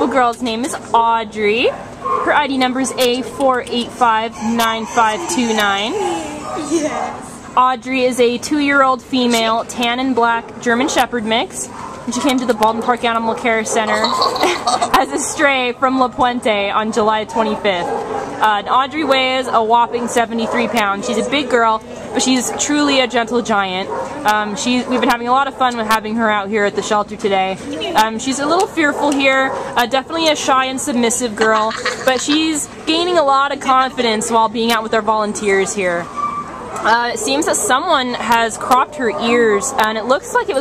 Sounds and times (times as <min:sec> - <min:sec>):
Speech: 0:00.0 - 0:36.1, 0:36.8 - 0:40.6
Dog: 0:05.2 - 0:07.3, 0:11.7 - 0:14.0, 0:23.8 - 0:25.2, 0:28.9 - 0:29.8.